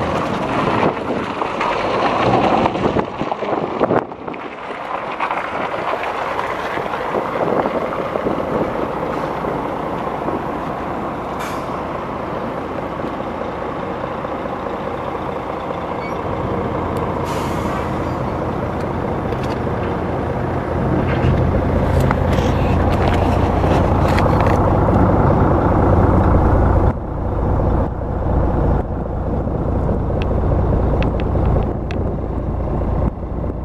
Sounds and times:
Vehicle: 0:00.0 - 0:33.6.

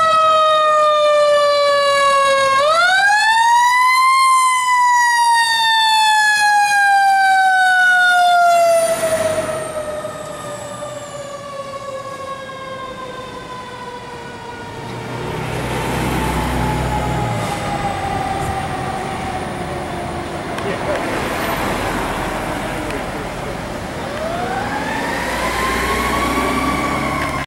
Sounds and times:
Fire engine, fire truck (siren): 0:00.0 - 0:27.4.

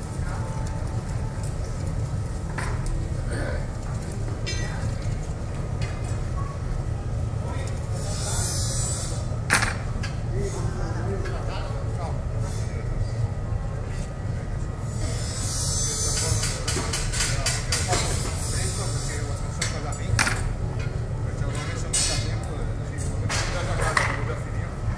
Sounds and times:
Speech: 0:10.3 - 0:24.9.

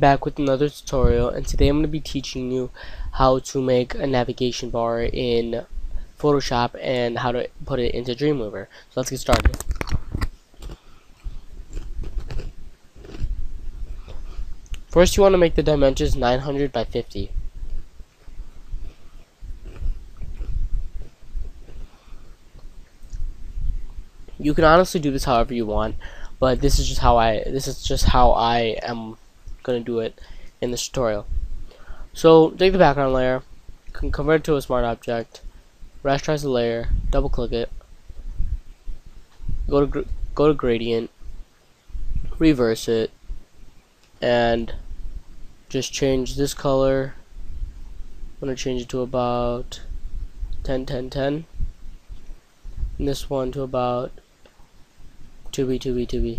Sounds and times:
Speech: 0:00.0 - 0:09.6, 0:14.8 - 0:17.4, 0:24.4 - 0:31.3, 0:32.1 - 0:35.4, 0:36.0 - 0:37.8, 0:39.7 - 0:41.1, 0:42.3 - 0:43.1, 0:44.2 - 0:44.8, 0:45.7 - 0:47.2, 0:48.4 - 0:49.9, 0:50.6 - 0:51.5, 0:53.0 - 0:54.2, 0:55.5 - 0:56.3.

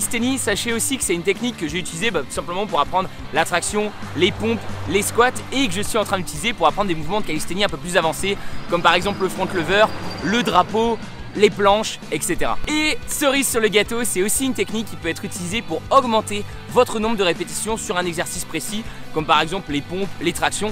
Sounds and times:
Music: 0:00.0 - 0:20.7
Speech: 0:00.0 - 0:20.7.

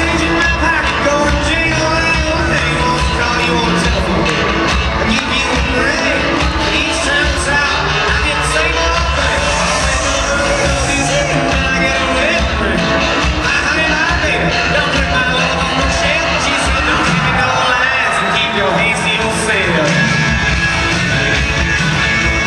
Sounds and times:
Inside, public space: 0:00.0 - 0:22.4
Music: 0:00.0 - 0:22.4
Speech: 0:10.0 - 0:20.2.

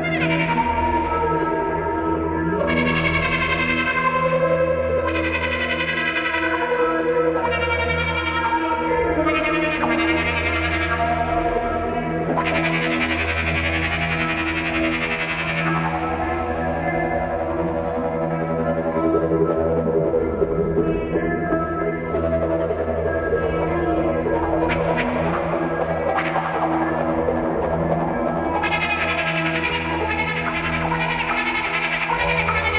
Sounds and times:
Ambient music: 0:00.0 - 0:32.7.

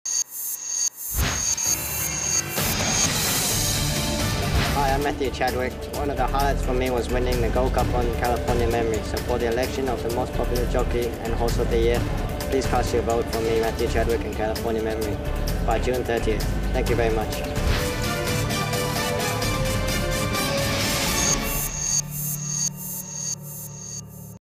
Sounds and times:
Music: 0:01.8 - 0:24.4
Speech: 0:04.8 - 0:17.5.

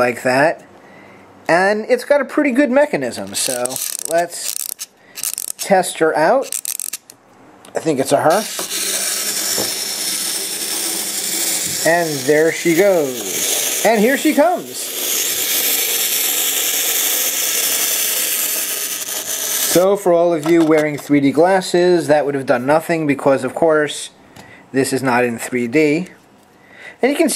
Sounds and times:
Speech: 0:00.0 - 0:00.6, 0:01.5 - 0:04.5, 0:05.6 - 0:06.5, 0:07.7 - 0:08.5, 0:11.8 - 0:14.9, 0:19.7 - 0:26.2, 0:27.0 - 0:27.3
Inside, small room: 0:00.0 - 0:27.3.

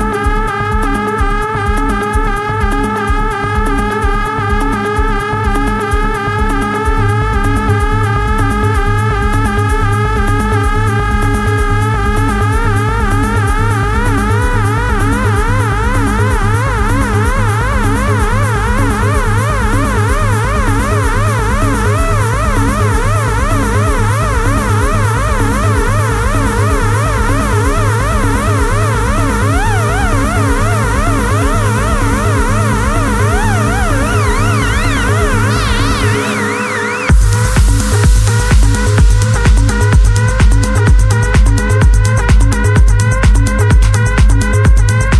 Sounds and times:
Trance music: 0:00.0 - 0:45.1.

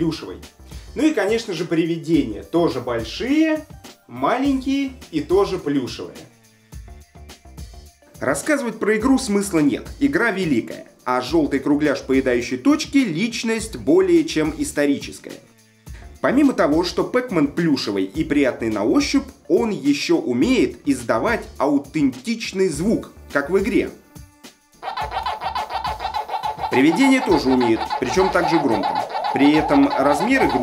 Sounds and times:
Speech: 0:00.0 - 0:06.3, 0:08.2 - 0:15.5, 0:16.2 - 0:24.0, 0:26.7 - 0:30.6
Music: 0:00.0 - 0:30.6.

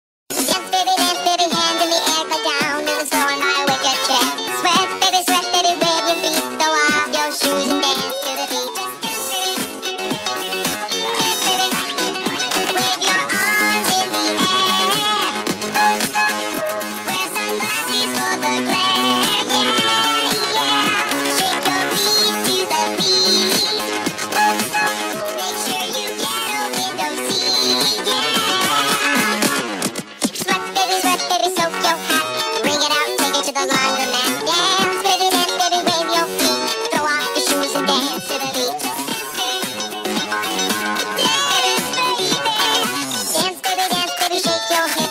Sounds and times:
Music: 0:00.3 - 0:45.1.

